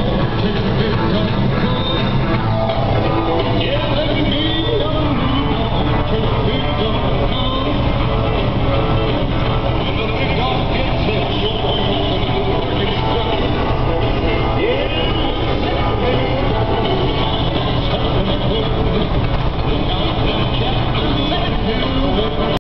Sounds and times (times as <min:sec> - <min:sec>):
Music: 0:00.0 - 0:22.6.